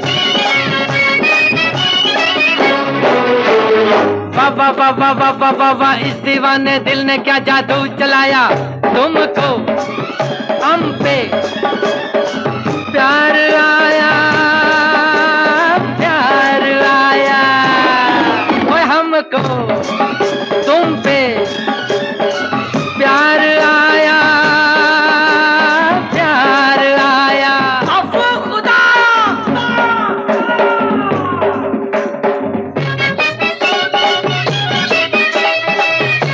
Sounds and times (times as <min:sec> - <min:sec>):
Music of Bollywood: 0:00.0 - 0:36.3.